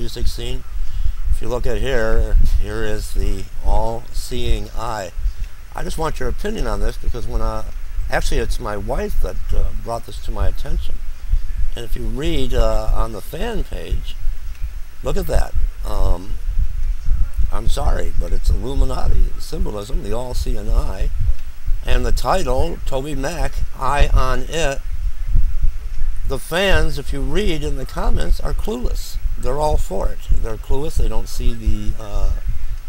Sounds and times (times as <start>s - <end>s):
Speech: 0.0s - 0.7s, 1.3s - 11.0s, 11.7s - 14.2s, 15.0s - 16.4s, 17.5s - 21.1s, 21.8s - 24.8s, 26.3s - 32.4s.